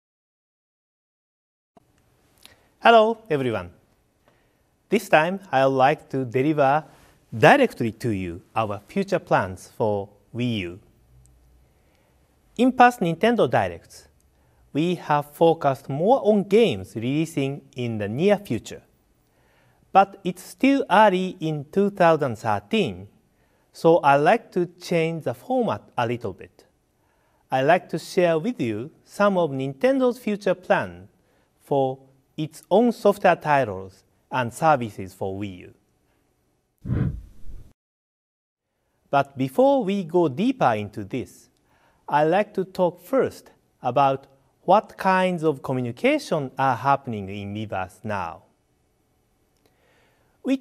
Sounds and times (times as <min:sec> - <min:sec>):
Speech: 0:02.8 - 0:03.8, 0:04.9 - 0:10.9, 0:12.6 - 0:14.1, 0:14.7 - 0:18.9, 0:20.0 - 0:26.7, 0:27.5 - 0:35.8, 0:39.1 - 0:41.5, 0:42.1 - 0:48.5.